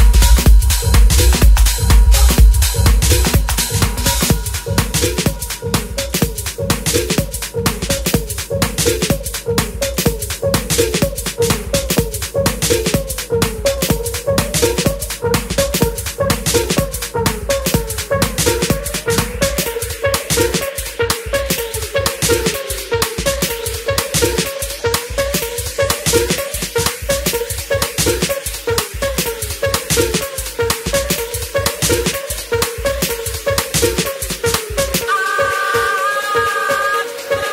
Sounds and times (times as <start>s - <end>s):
House music: 0.0s - 37.5s.